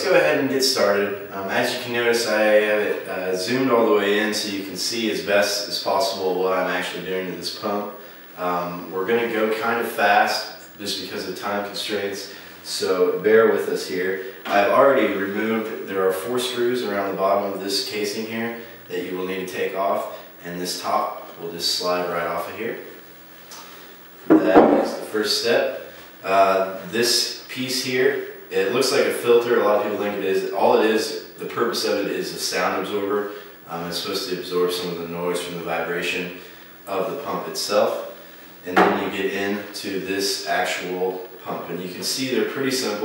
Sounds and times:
Speech: 0.0s - 22.9s, 24.3s - 43.0s.

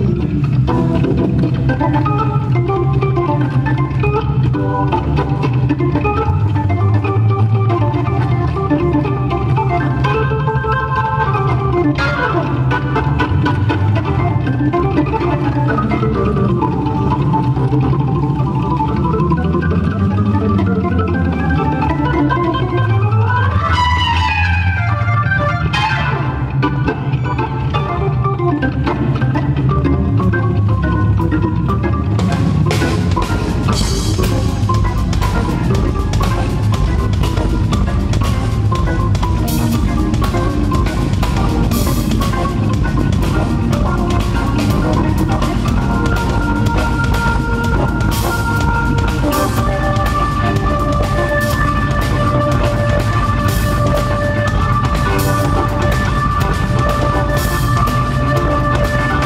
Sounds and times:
Electronic organ: 0.0s - 59.2s.

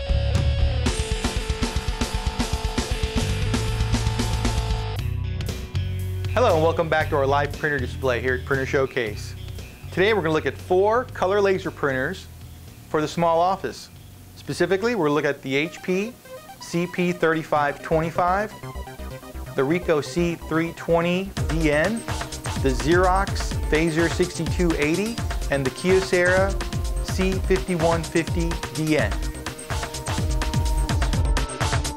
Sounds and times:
Music: 0.0s - 31.9s
Speech: 6.4s - 9.4s, 10.0s - 12.3s, 12.9s - 18.6s, 19.6s - 22.0s, 22.6s - 29.2s.

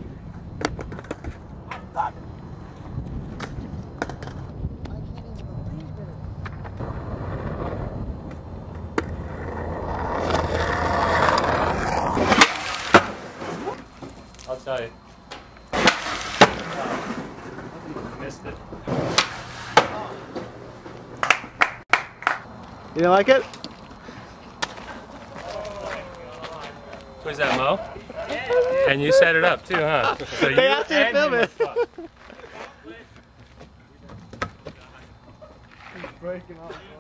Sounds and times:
Skateboard: 0.3s - 2.1s, 3.1s - 4.9s, 6.4s - 14.2s, 15.7s - 22.4s.

